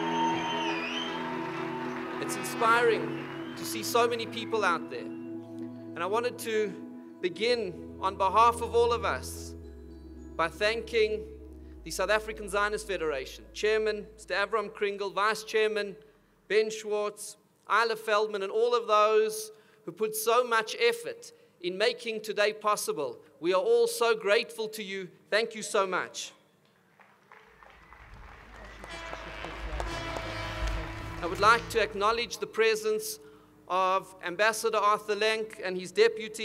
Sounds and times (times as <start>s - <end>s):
Music: 0.0s - 15.4s, 27.3s - 33.7s
Male speech, man speaking: 2.2s - 5.1s, 6.0s - 9.5s, 10.4s - 11.3s, 11.9s - 26.4s, 29.1s - 30.1s, 31.2s - 36.4s
Narration, monologue: 2.2s - 26.7s, 31.2s - 36.4s.